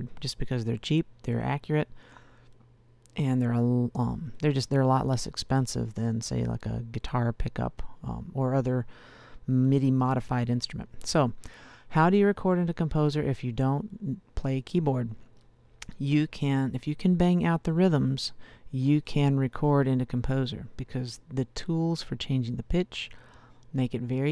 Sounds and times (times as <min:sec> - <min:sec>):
Speech: 0:00.0 - 0:01.9, 0:03.1 - 0:08.9, 0:09.5 - 0:15.2, 0:15.8 - 0:24.3.